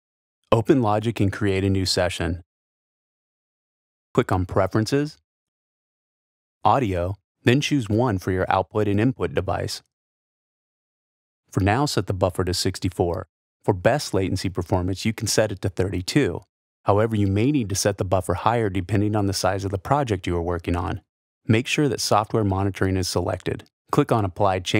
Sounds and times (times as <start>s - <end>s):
Speech: 0.5s - 2.5s, 4.2s - 5.2s, 6.7s - 9.9s, 11.5s - 24.8s.